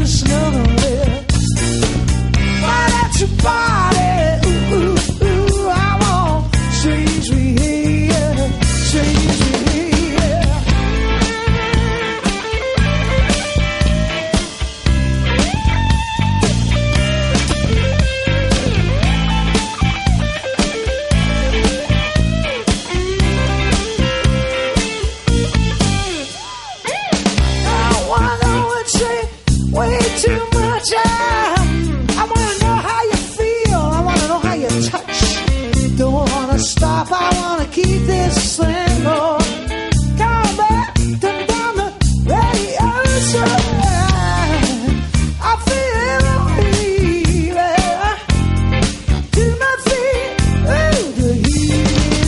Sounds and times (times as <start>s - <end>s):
Psychedelic rock: 0.0s - 52.2s.